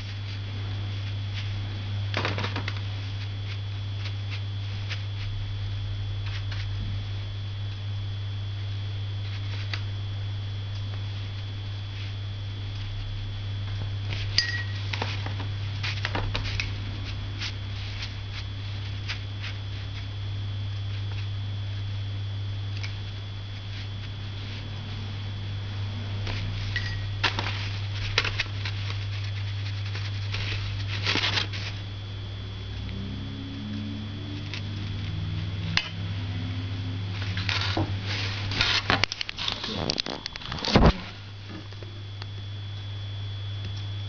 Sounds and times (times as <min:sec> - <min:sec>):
Inside, small room: 0:00.0 - 0:44.0.